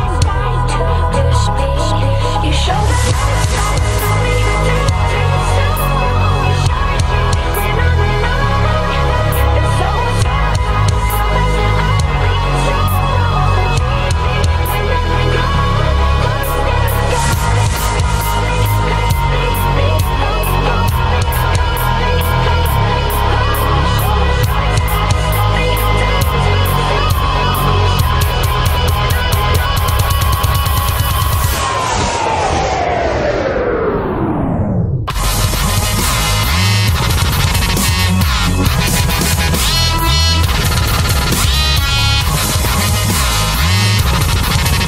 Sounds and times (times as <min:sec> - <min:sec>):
Music: 0:00.0 - 0:44.8.